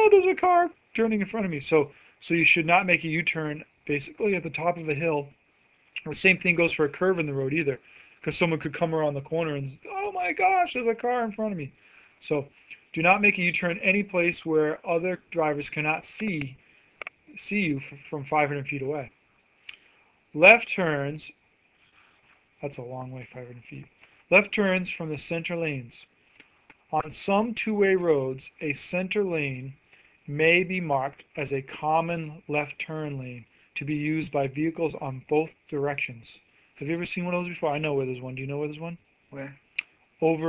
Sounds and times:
Speech: 0:00.0 - 0:05.4, 0:06.0 - 0:16.6, 0:17.3 - 0:19.1, 0:20.4 - 0:21.4, 0:22.6 - 0:26.1, 0:26.9 - 0:39.6, 0:40.2 - 0:40.4.

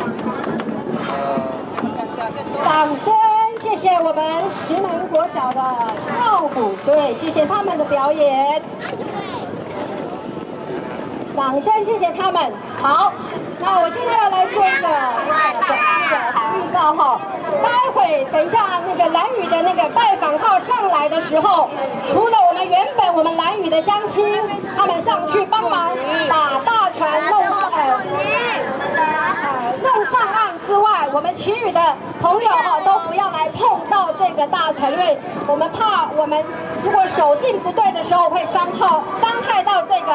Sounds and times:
Sailboat, sailing ship: 0:00.0 - 0:40.1.

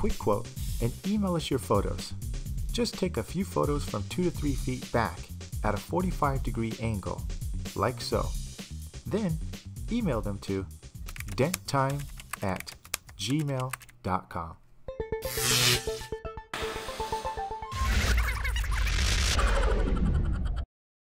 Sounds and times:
Speech: 0:00.0 - 0:08.4, 0:09.1 - 0:14.6
Music: 0:00.0 - 0:13.8, 0:14.9 - 0:18.5.

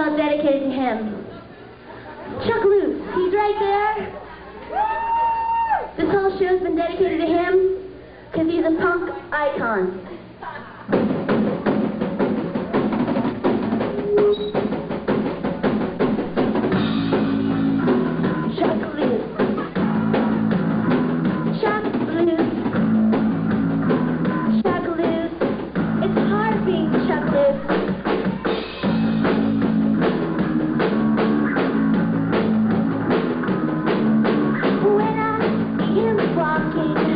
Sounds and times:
Music: 0:10.9 - 0:37.1.

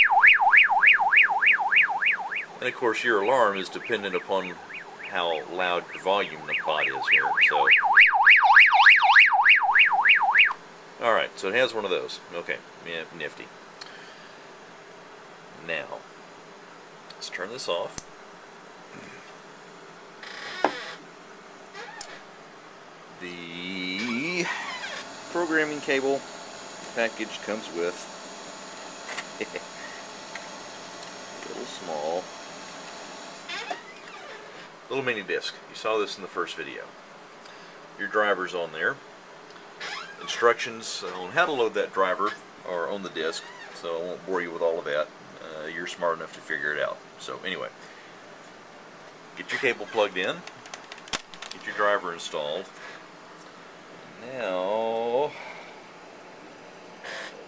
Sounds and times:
Speech: 0:02.6 - 0:07.8, 0:11.0 - 0:13.5, 0:15.6 - 0:16.0, 0:17.1 - 0:18.0, 0:23.2 - 0:24.6, 0:25.3 - 0:26.2, 0:27.0 - 0:28.1, 0:31.4 - 0:32.3, 0:34.9 - 0:36.9, 0:38.0 - 0:39.0, 0:40.2 - 0:47.8, 0:49.4 - 0:50.5, 0:51.6 - 0:52.8, 0:54.2 - 0:55.4.

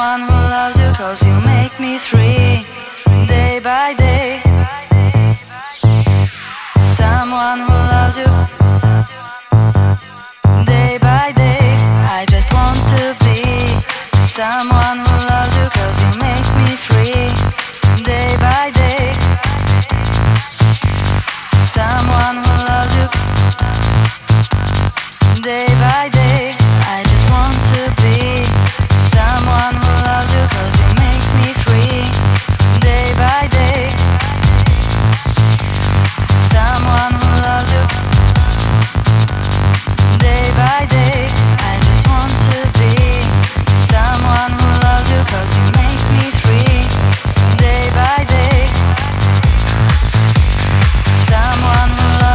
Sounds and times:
Electronic dance music: 0:00.0 - 0:52.3.

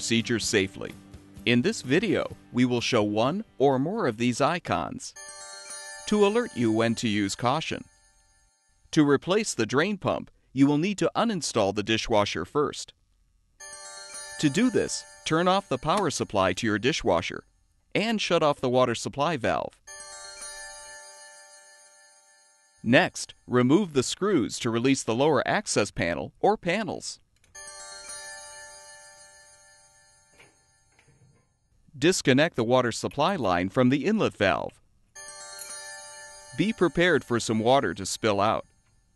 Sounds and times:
Speech: 0:00.0 - 0:05.2, 0:06.1 - 0:07.8, 0:09.0 - 0:13.0, 0:14.4 - 0:17.4, 0:18.0 - 0:19.8, 0:22.9 - 0:27.2, 0:32.0 - 0:34.8, 0:36.6 - 0:38.6.

